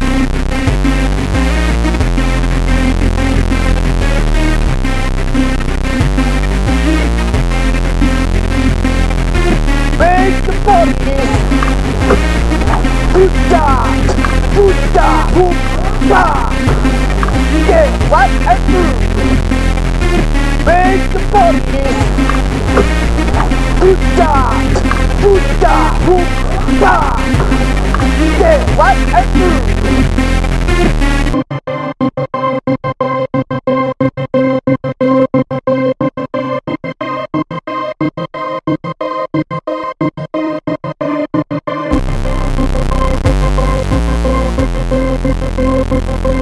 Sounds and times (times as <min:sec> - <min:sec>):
Synthesizer: 0:00.0 - 0:46.4.